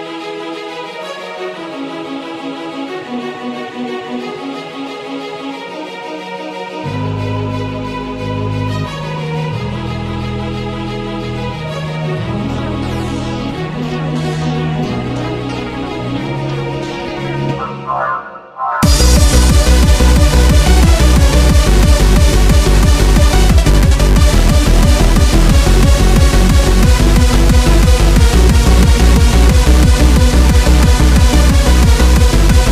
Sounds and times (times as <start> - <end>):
Techno: 17.2 - 32.7.